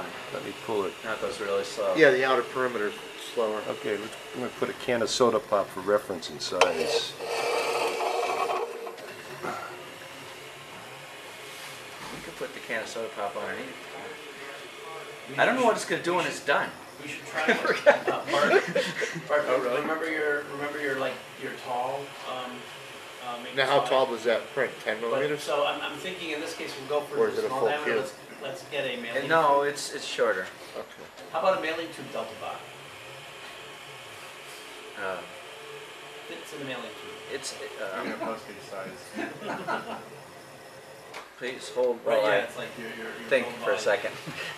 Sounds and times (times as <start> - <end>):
Speech: 0.3 - 7.2, 12.2 - 32.7, 36.3 - 39.1, 41.4 - 44.3.